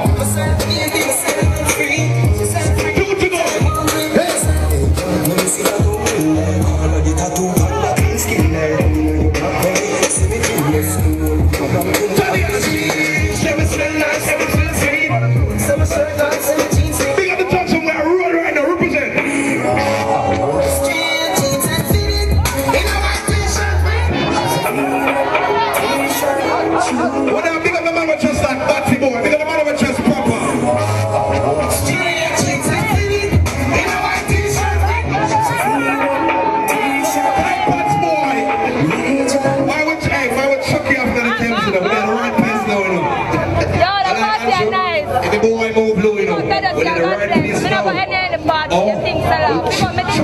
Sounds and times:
Music: 0.0 - 50.2.

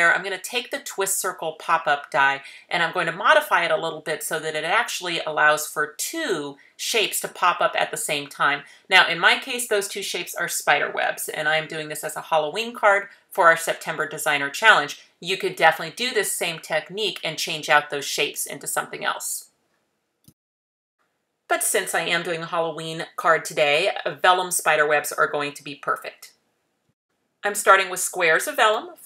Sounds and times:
Speech: 0.0 - 19.5, 21.5 - 26.3, 27.4 - 29.0.

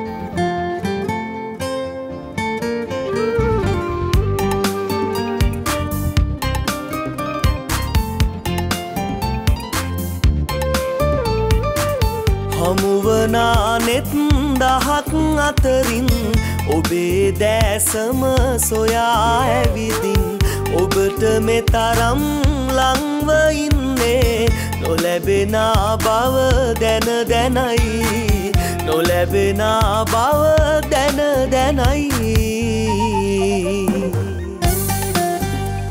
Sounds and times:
Tender music: 3.0 - 35.9.

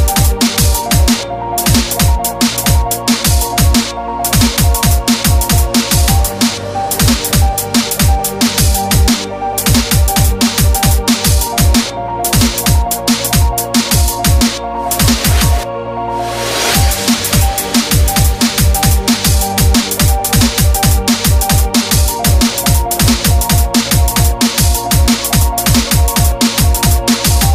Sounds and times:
Music: 0.0 - 27.5.

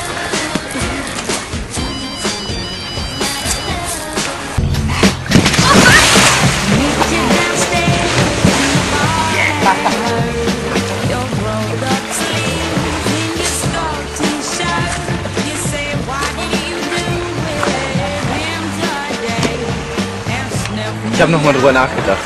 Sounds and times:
Music: 0.0 - 22.2
Splash, splatter: 5.2 - 10.0.

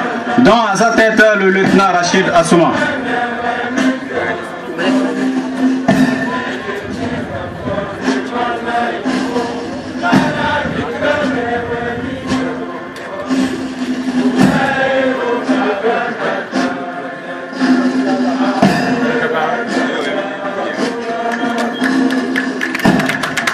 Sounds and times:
Music: 0.0 - 23.5.

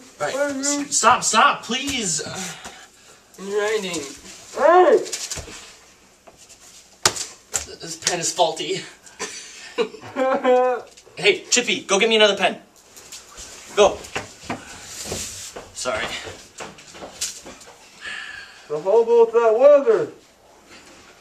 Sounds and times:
Inside, small room: 0.0 - 21.2
Speech: 0.2 - 2.6, 3.4 - 5.1, 7.7 - 9.0, 11.2 - 12.7, 18.7 - 20.2.

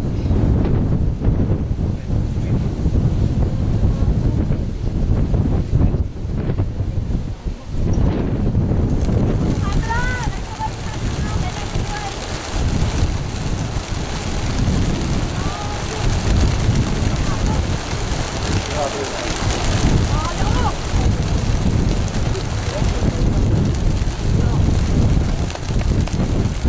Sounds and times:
Speech: 9.5 - 12.4, 15.4 - 16.3, 18.5 - 21.3, 22.3 - 23.4.

